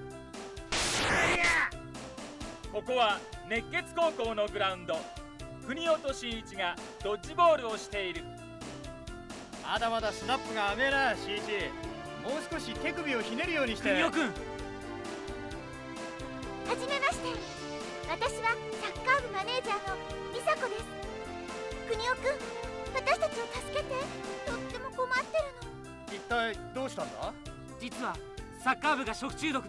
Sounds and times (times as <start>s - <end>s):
Music: 0.0s - 29.6s.